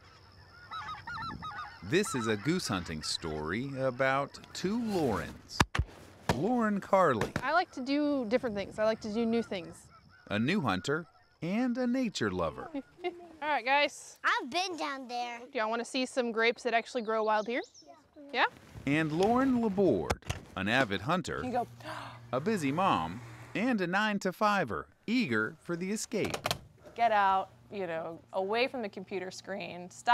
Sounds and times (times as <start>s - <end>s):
Speech: 22.4s - 26.4s.